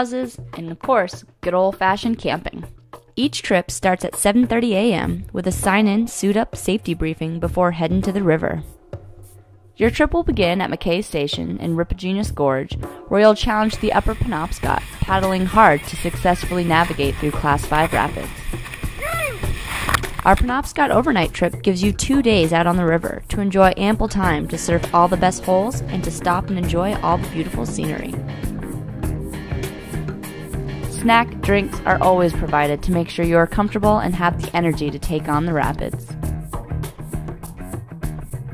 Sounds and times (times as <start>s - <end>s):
Narration, monologue: 0.0s - 18.9s, 20.0s - 37.3s
Boat, Water vehicle: 13.6s - 20.3s.